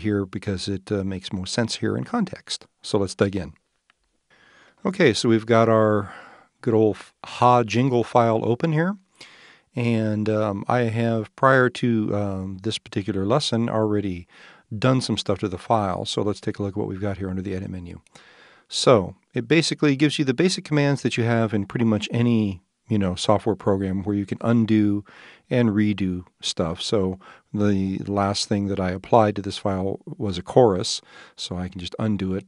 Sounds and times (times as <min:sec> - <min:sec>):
Speech: 0:00.0 - 0:03.6, 0:04.8 - 0:09.1, 0:09.8 - 0:18.1, 0:18.7 - 0:32.4.